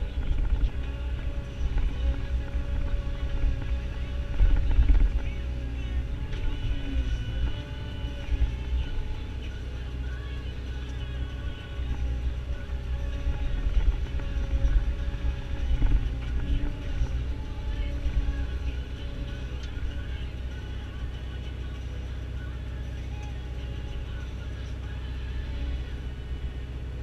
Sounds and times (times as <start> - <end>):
Music: 0.0 - 27.0.